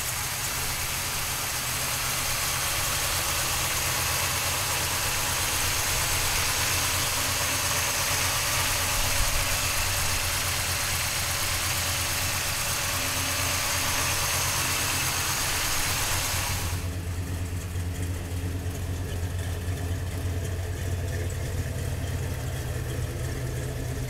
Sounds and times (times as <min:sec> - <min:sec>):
Idling: 0:00.0 - 0:24.0
Vehicle: 0:00.0 - 0:24.0.